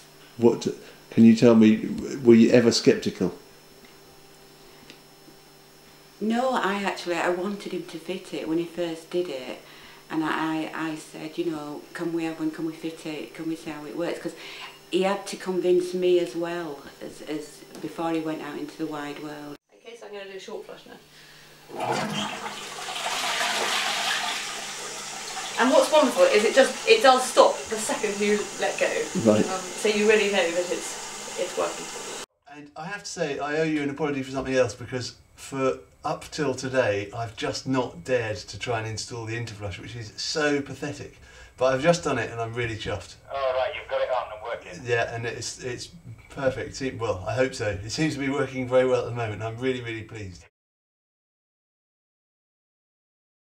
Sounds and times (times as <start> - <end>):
Inside, small room: 0.0 - 50.5
Speech: 0.4 - 3.4, 6.2 - 14.4, 15.0 - 21.0, 25.6 - 31.8, 32.5 - 50.5
Toilet flush: 21.7 - 32.3.